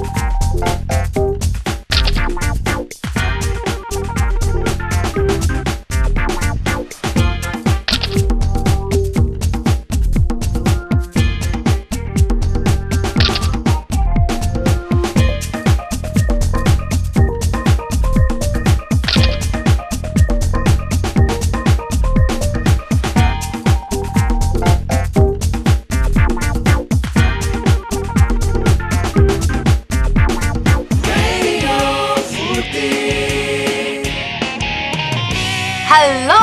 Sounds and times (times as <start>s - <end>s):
Music: 0.0s - 36.4s.